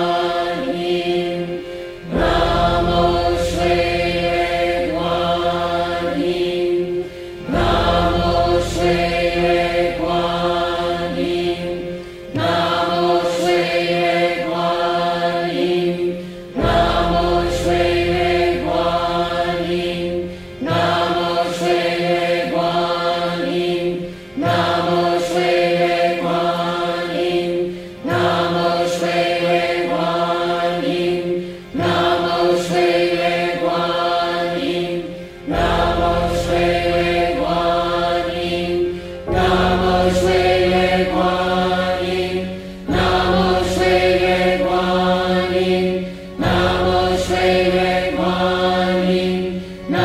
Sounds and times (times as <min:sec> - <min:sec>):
Mantra: 0:00.0 - 0:50.0.